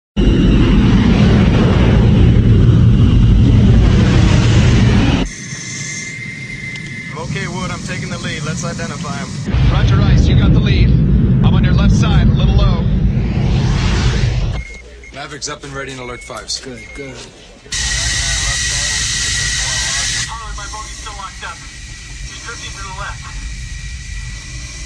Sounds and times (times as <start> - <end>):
Aircraft: 0.2 - 14.8, 17.7 - 24.8.